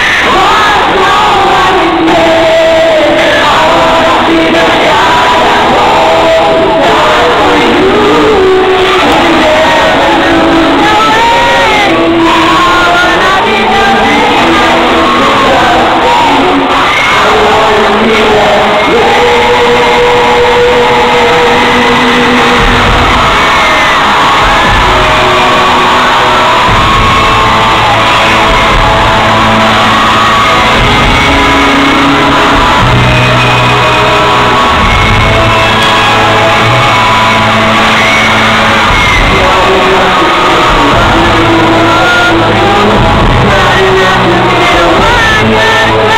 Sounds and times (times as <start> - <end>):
Music: 0.0 - 46.1.